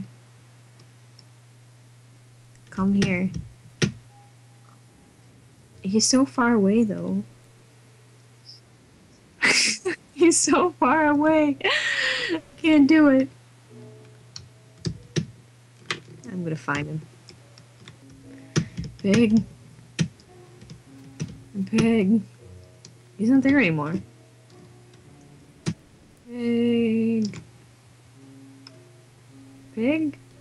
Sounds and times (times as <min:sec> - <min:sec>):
Speech: 0:02.7 - 0:03.4, 0:05.9 - 0:07.3, 0:09.5 - 0:11.7, 0:12.6 - 0:13.3, 0:16.3 - 0:17.1, 0:19.0 - 0:19.5, 0:21.6 - 0:22.3, 0:23.2 - 0:24.1, 0:26.3 - 0:27.4, 0:29.8 - 0:30.2.